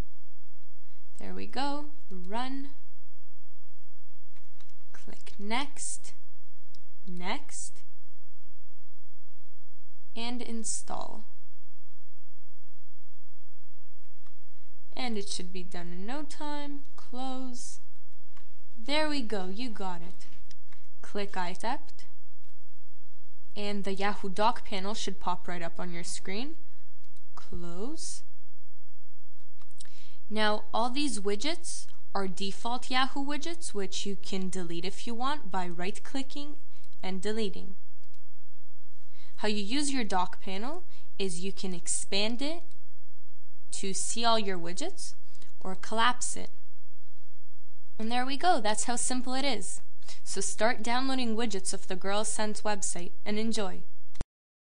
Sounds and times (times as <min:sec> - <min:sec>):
Speech: 0:01.2 - 0:02.8, 0:05.0 - 0:06.2, 0:07.1 - 0:07.8, 0:10.2 - 0:11.3, 0:15.0 - 0:17.8, 0:18.8 - 0:20.3, 0:21.0 - 0:22.1, 0:23.6 - 0:26.6, 0:27.4 - 0:28.3, 0:30.3 - 0:37.7, 0:39.4 - 0:42.7, 0:43.7 - 0:46.6, 0:48.0 - 0:53.9.